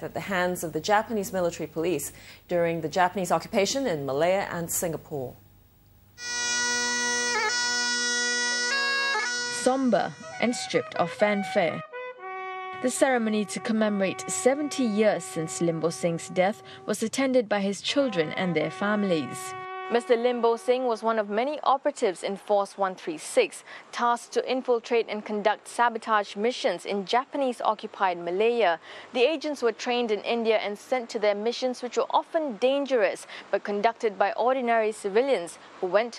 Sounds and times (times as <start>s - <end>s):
Bagpipes: 6.2s - 16.8s, 18.1s - 20.5s.